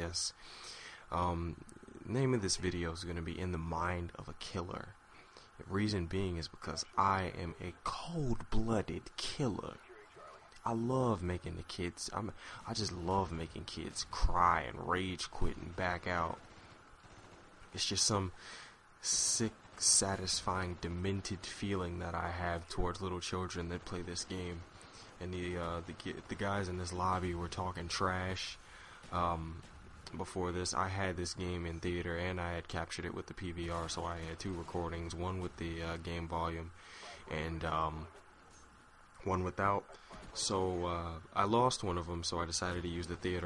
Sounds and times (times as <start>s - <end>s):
Speech: 0.0s - 0.4s, 1.1s - 5.0s, 5.6s - 16.4s, 17.8s - 18.4s, 19.0s - 38.1s, 39.2s - 43.4s.